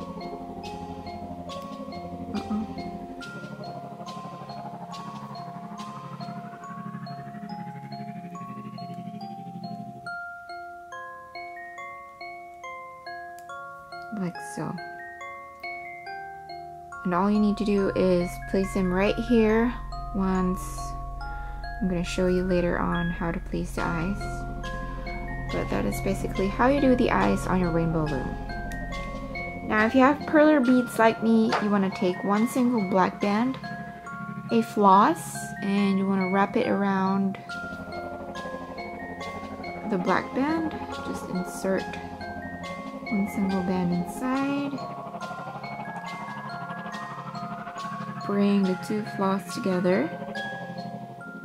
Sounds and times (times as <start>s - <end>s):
Glockenspiel: 0.0s - 51.4s.